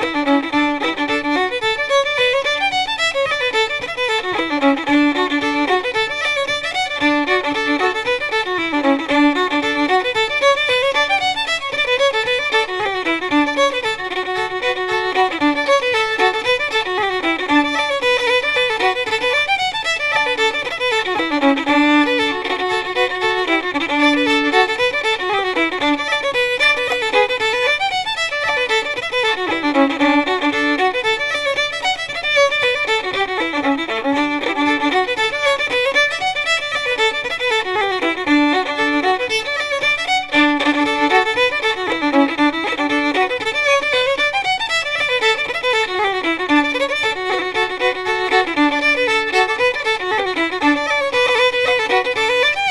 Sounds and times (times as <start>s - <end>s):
Violin, fiddle: 0.0s - 52.7s.